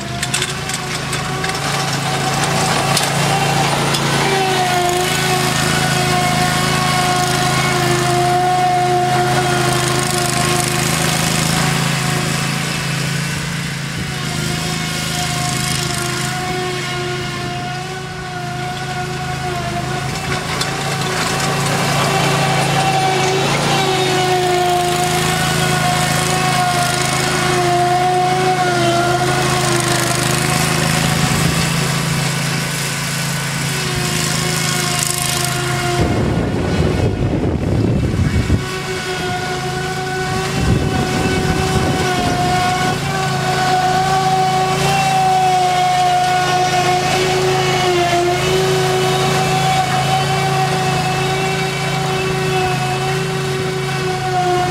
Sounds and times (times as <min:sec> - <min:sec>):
Lawn mower: 0:00.0 - 0:54.7
Vehicle: 0:00.0 - 0:54.7.